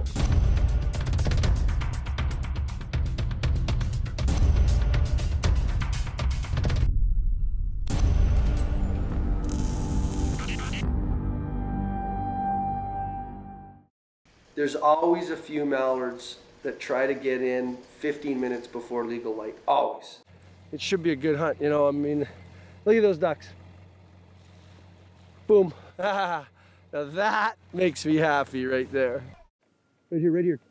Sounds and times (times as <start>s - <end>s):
Music: 0.0s - 13.9s
Speech: 14.6s - 23.6s, 25.5s - 29.5s, 30.1s - 30.6s.